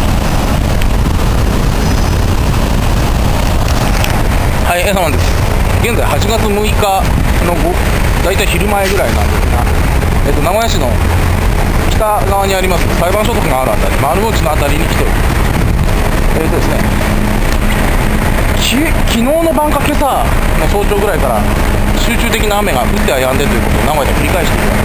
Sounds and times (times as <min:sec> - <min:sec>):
Rain on surface: 0:00.0 - 0:24.8.